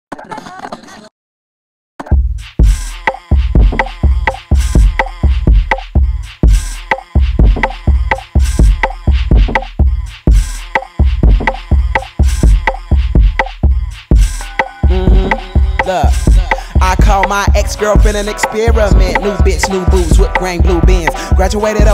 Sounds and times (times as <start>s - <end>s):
Music: 2.1s - 21.9s.